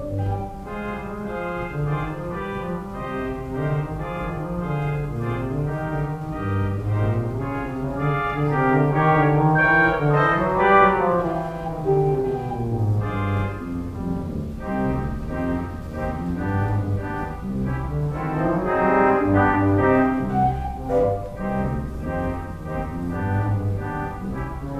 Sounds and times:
Hammond organ: 0.0s - 24.8s.

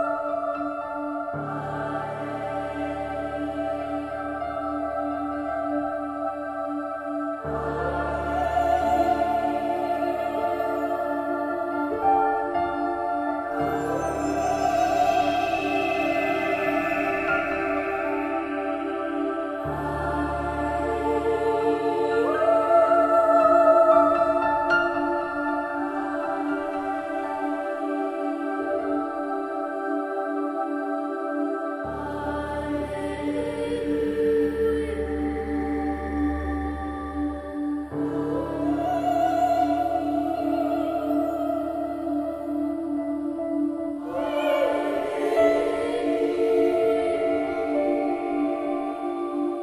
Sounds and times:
Music: 0.0s - 49.6s.

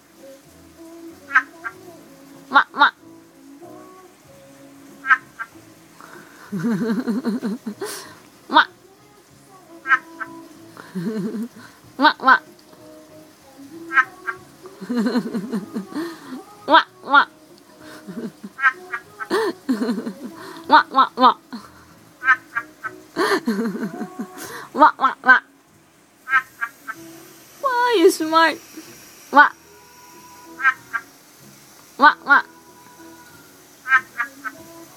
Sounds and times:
Frog: 5.0s - 5.5s, 9.8s - 10.1s, 18.6s - 19.0s, 26.3s - 27.0s, 30.6s - 31.1s, 33.8s - 34.6s.

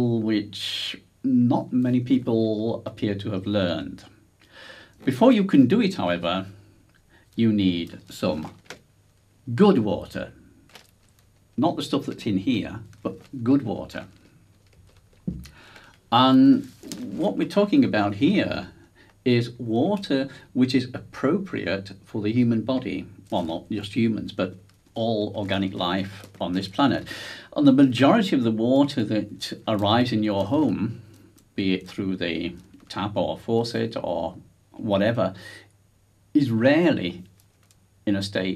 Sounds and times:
Speech: 0.0s - 4.2s, 5.0s - 6.6s, 7.4s - 8.6s, 9.5s - 10.4s, 11.6s - 14.2s, 16.1s - 35.7s, 36.4s - 37.3s, 38.0s - 38.5s.

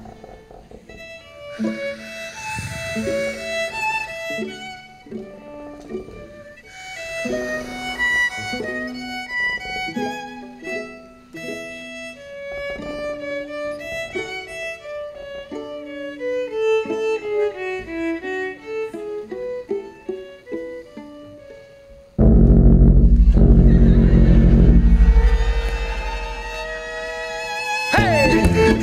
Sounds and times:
Pizzicato: 0.0s - 28.8s.

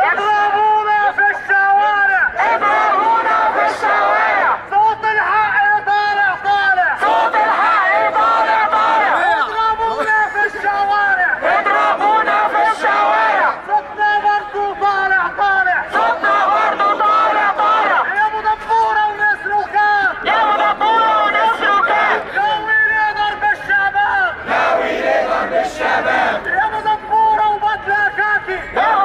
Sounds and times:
Speech: 4.7s - 7.0s, 9.1s - 11.8s, 13.4s - 16.0s, 17.9s - 24.4s, 25.7s - 29.0s.

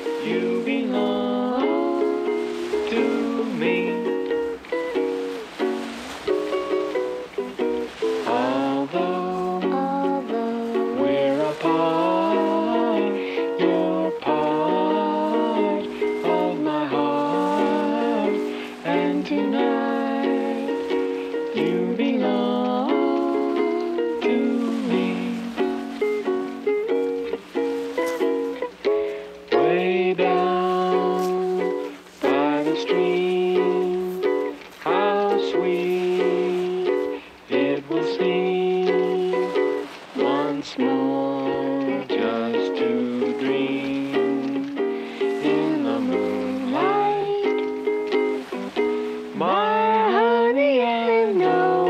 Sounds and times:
Music: 0.0s - 51.9s.

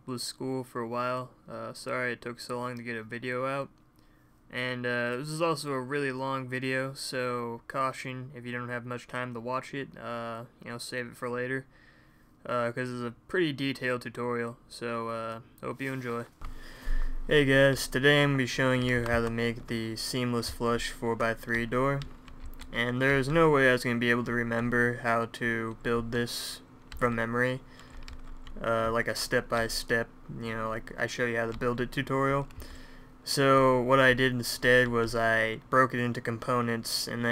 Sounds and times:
Speech: 0.0s - 3.7s, 4.5s - 11.7s, 12.4s - 16.3s, 17.3s - 22.1s, 22.7s - 27.6s, 28.6s - 32.5s, 33.2s - 37.3s.

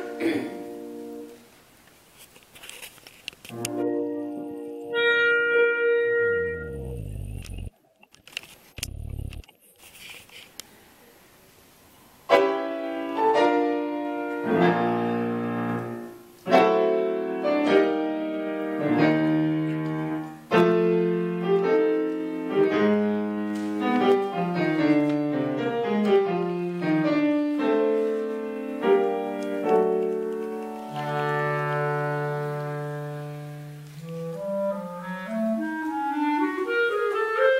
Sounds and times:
Piano: 0.0s - 1.8s, 2.6s - 7.7s, 12.3s - 37.5s
Clarinet: 3.5s - 7.7s, 12.3s - 37.5s.

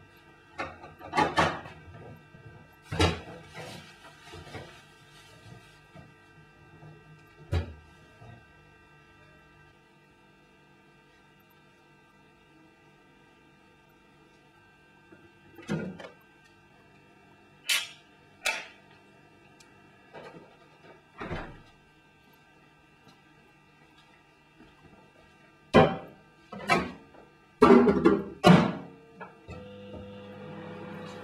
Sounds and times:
Microwave oven: 0.0s - 31.2s.

